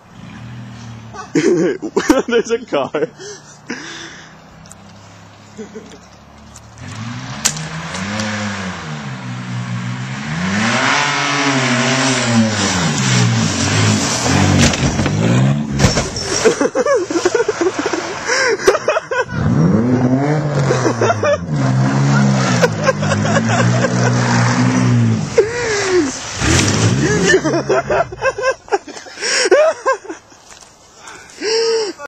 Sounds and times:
Skidding: 0.0 - 31.4
Car passing by: 21.6 - 28.4.

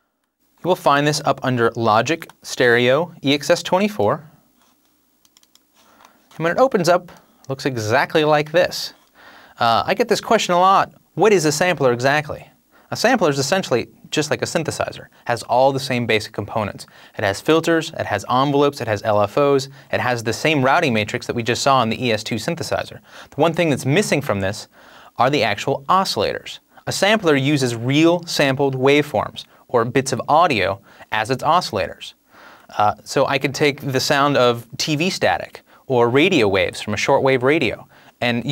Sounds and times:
Speech: 0.6 - 4.4, 6.4 - 9.0, 9.6 - 38.5.

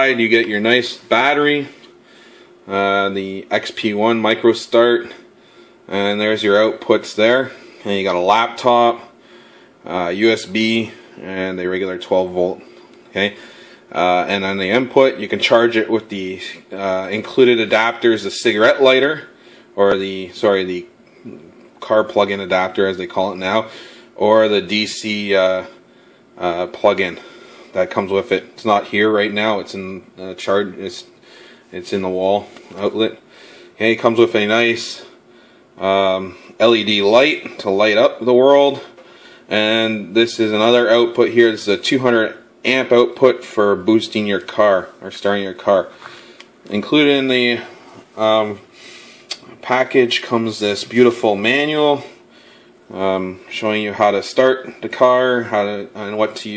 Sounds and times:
Speech: 0.0 - 1.8, 2.7 - 5.3, 5.9 - 9.2, 9.8 - 25.8, 26.4 - 31.1, 31.7 - 33.2, 33.8 - 35.2, 35.8 - 46.0, 46.7 - 48.7, 49.3 - 52.2, 52.9 - 56.5.

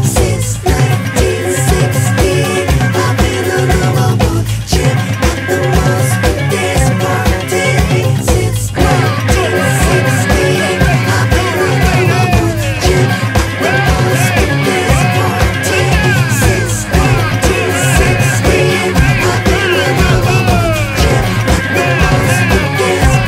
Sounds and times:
Ska: 0.0 - 23.2.

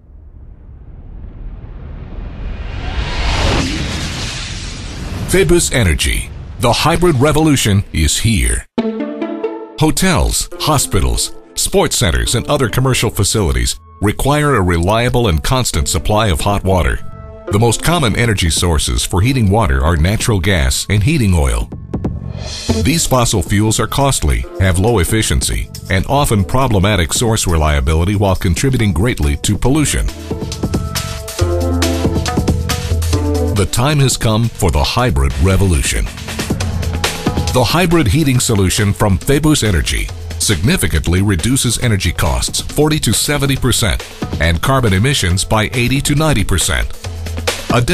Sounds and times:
Speech: 5.3 - 8.7, 9.8 - 21.7, 22.7 - 30.2, 33.6 - 36.2, 37.6 - 47.0, 47.7 - 47.9
Music: 8.7 - 47.9.

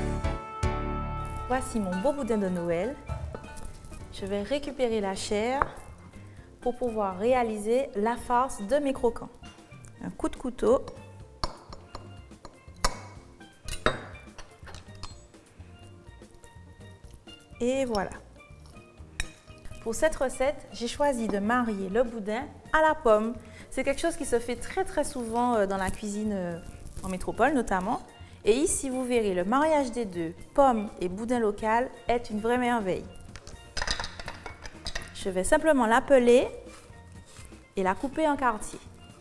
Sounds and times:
Music: 0.0 - 39.2.

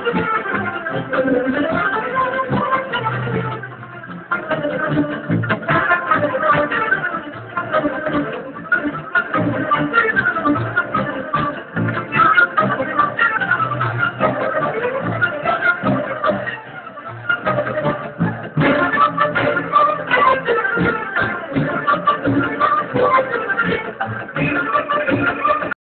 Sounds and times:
Folk music: 0.0 - 25.8.

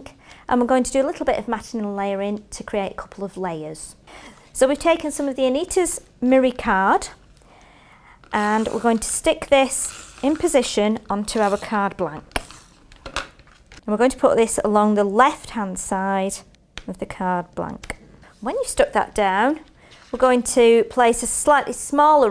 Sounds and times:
Speech: 0.0 - 7.2, 8.3 - 12.3, 13.9 - 22.3
Inside, small room: 0.0 - 22.3.

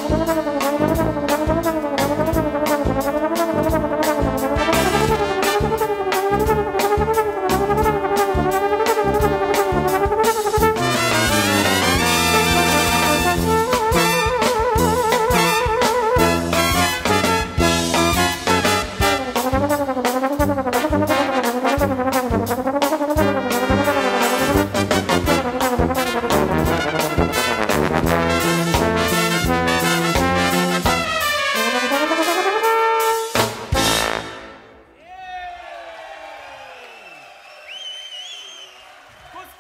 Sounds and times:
Trombone: 0.0 - 34.8.

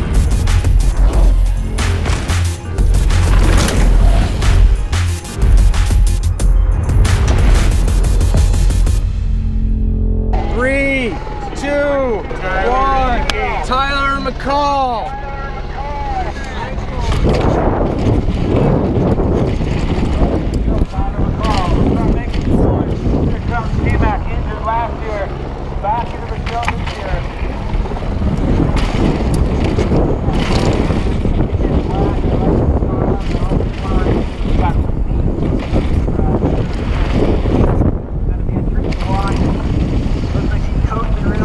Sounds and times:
Speech: 20.7 - 27.4, 31.5 - 34.9, 38.3 - 39.7, 40.4 - 41.4.

